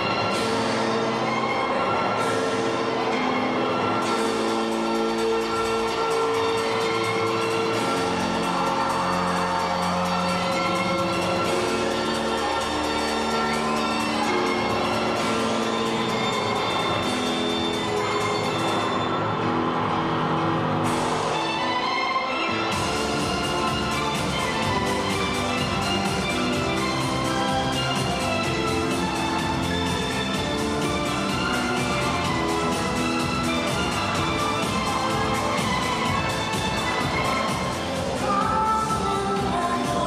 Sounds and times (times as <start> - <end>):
Music: 0.0 - 40.0.